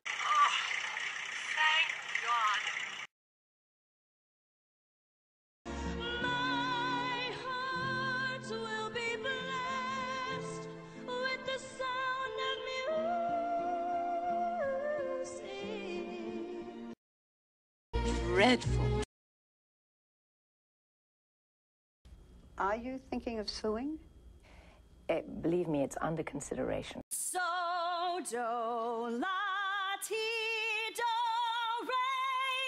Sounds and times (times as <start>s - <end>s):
Music: 5.7s - 17.0s, 18.0s - 19.1s
Speech: 22.6s - 24.0s, 25.1s - 27.0s.